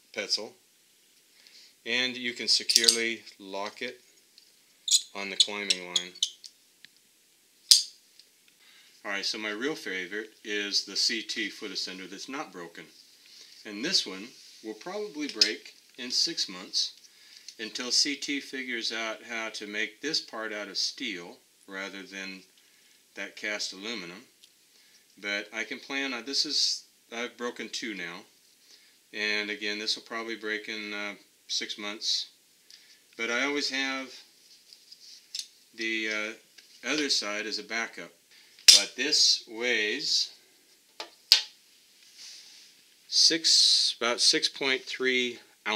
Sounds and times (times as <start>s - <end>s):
Speech: 0.1s - 0.6s, 1.9s - 4.0s, 5.1s - 6.2s, 9.0s - 13.0s, 13.6s - 17.0s, 17.6s - 22.5s, 23.2s - 24.3s, 25.2s - 28.3s, 29.2s - 32.4s, 33.2s - 34.3s, 35.8s - 40.4s, 43.1s - 45.7s.